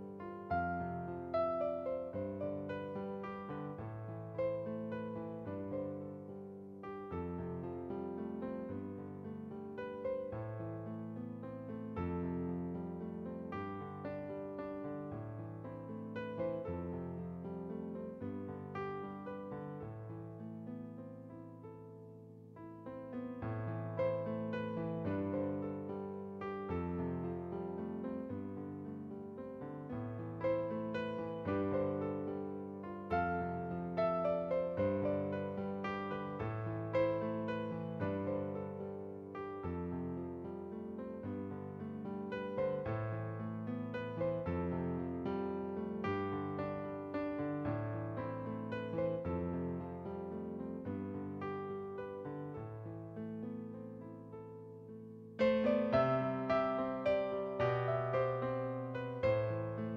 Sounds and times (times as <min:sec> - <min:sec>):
Music: 0:00.0 - 0:59.9.